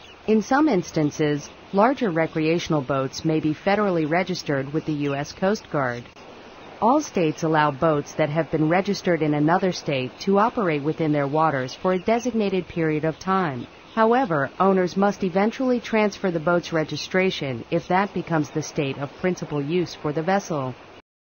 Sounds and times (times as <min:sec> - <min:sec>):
Speech: 0:00.3 - 0:06.1, 0:06.8 - 0:20.8.